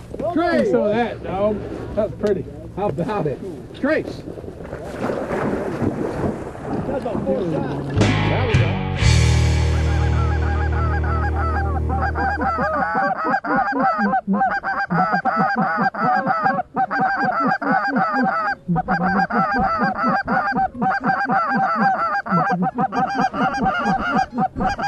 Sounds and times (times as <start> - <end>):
Honk: 9.8 - 24.8.